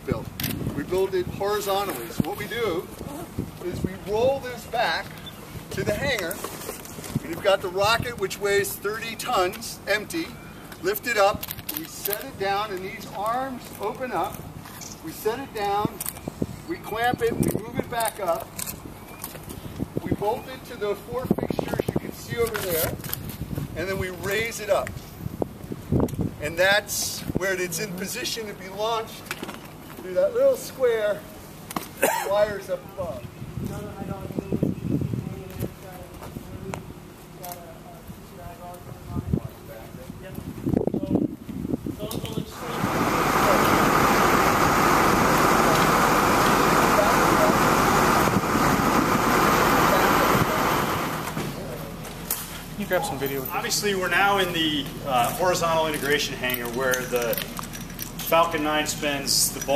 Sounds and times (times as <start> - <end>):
Speech: 0.0 - 5.1, 5.7 - 6.5, 7.2 - 14.4, 15.0 - 16.0, 16.7 - 18.5, 20.0 - 23.0, 23.8 - 24.9, 26.4 - 29.2, 30.0 - 31.3, 32.2 - 41.3, 42.0 - 43.9, 46.7 - 48.3, 52.8 - 57.5, 58.2 - 59.7
Outside, urban or manmade: 0.0 - 59.7.